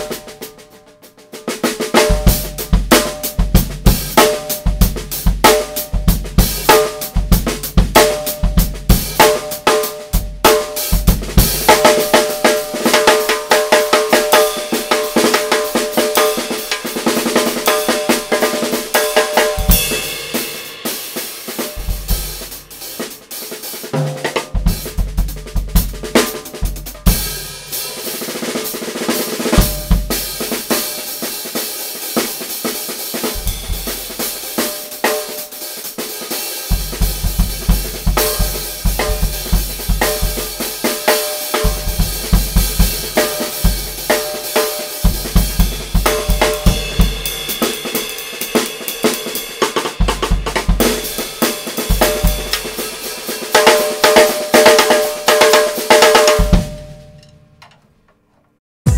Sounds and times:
Cymbal: 0:00.0 - 0:57.1
Snare drum: 0:00.0 - 0:57.1
Drum kit: 0:00.0 - 0:57.8.

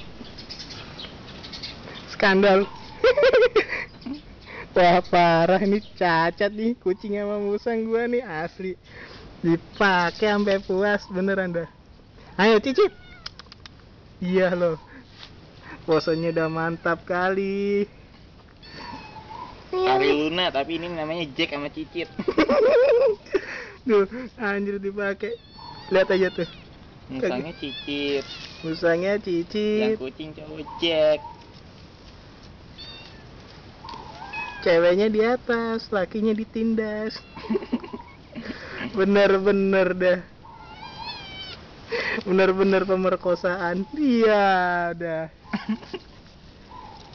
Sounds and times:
Meow: 0:12.8 - 0:13.4, 0:18.6 - 0:19.2, 0:25.3 - 0:28.8, 0:32.8 - 0:33.3, 0:34.1 - 0:34.7, 0:40.6 - 0:41.6.

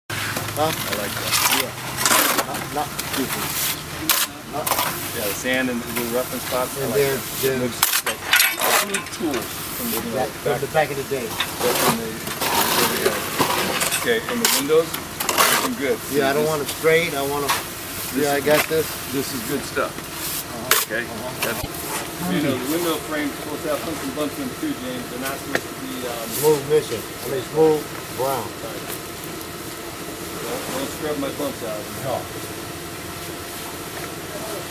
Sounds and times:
Scratch: 0:00.2 - 0:02.6, 0:11.4 - 0:15.8
Speech: 0:00.6 - 0:07.8, 0:08.6 - 0:13.3, 0:14.0 - 0:28.9, 0:30.4 - 0:32.3.

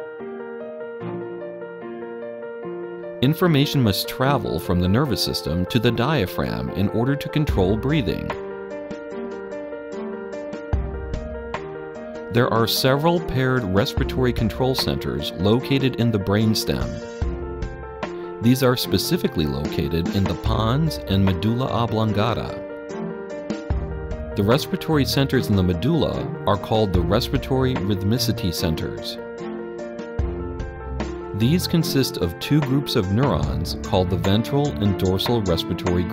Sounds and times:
Music: 0:00.0 - 0:36.1
Speech: 0:03.2 - 0:08.4, 0:12.3 - 0:17.0, 0:18.4 - 0:22.6, 0:24.4 - 0:29.2, 0:31.4 - 0:36.1.

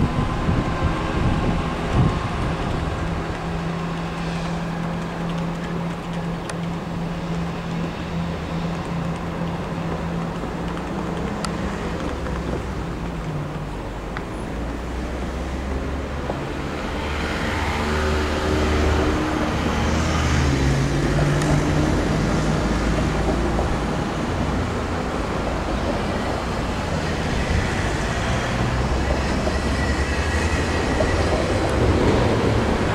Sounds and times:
Railroad car, train wagon: 0:00.0 - 0:32.9
Train: 0:00.0 - 0:32.9.

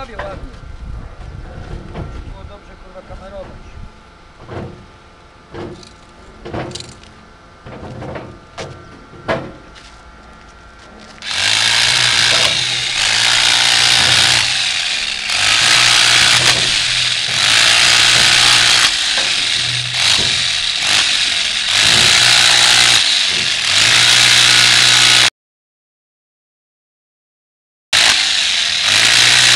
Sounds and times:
Chainsaw: 0:11.2 - 0:25.3, 0:28.0 - 0:29.5.

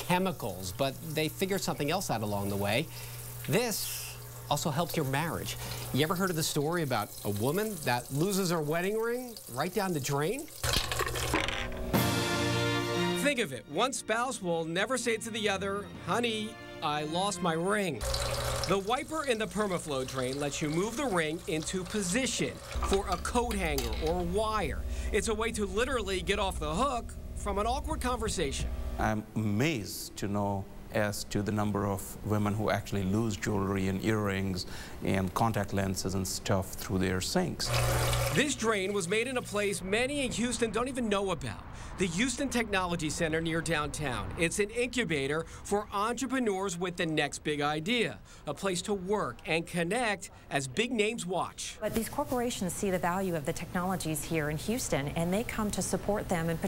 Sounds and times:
Speech: 0:00.0 - 0:02.9, 0:03.5 - 0:10.5, 0:13.2 - 0:18.0, 0:18.7 - 0:37.7, 0:38.4 - 0:56.6
Sink (filling or washing): 0:00.0 - 0:11.4, 0:18.0 - 0:25.9, 0:37.6 - 0:39.6.

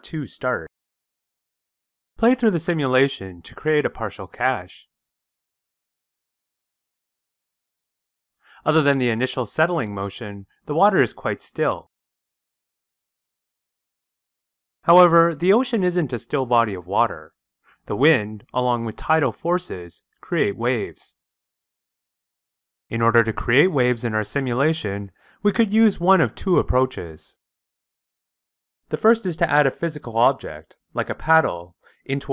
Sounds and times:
Speech: 0:00.0 - 0:00.7, 0:02.2 - 0:04.9, 0:08.6 - 0:11.9, 0:14.9 - 0:17.3, 0:17.9 - 0:21.2, 0:22.9 - 0:27.4, 0:28.9 - 0:32.3.

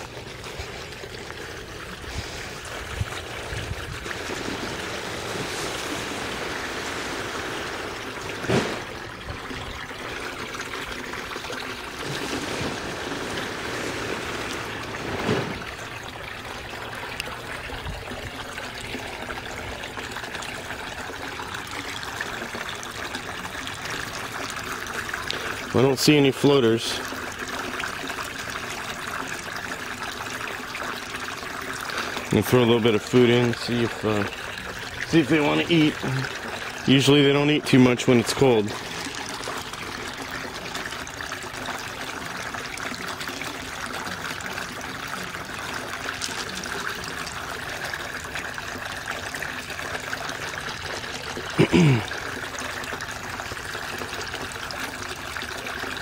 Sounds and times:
Pour: 0:00.0 - 0:56.0.

